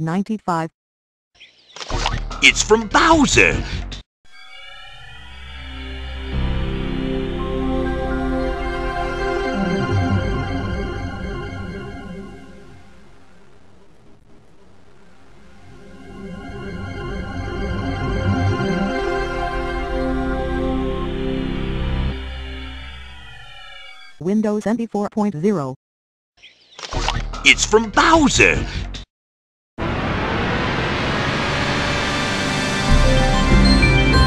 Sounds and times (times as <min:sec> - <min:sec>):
Music: 0:05.3 - 0:12.9, 0:16.2 - 0:23.2, 0:32.7 - 0:34.2.